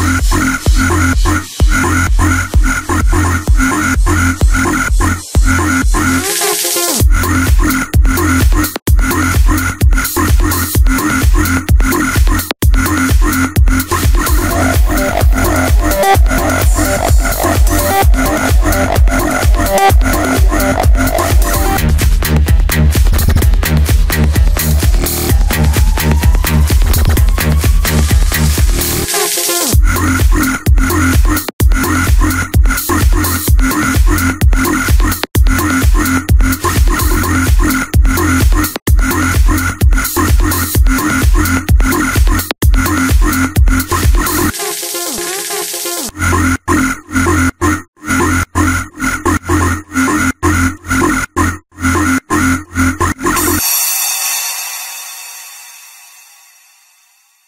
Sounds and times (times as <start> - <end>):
Electronic dance music: 0.0 - 7.6, 12.2 - 30.4, 43.8 - 46.1, 53.3 - 55.9.